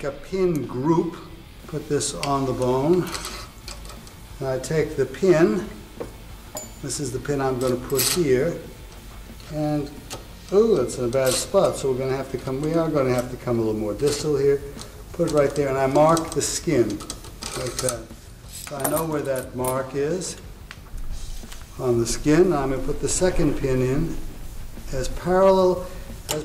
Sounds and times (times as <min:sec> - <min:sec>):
Speech: 0:00.0 - 0:03.2, 0:04.4 - 0:05.8, 0:06.8 - 0:08.7, 0:09.5 - 0:18.1, 0:18.7 - 0:20.4, 0:21.8 - 0:24.2, 0:24.9 - 0:26.4.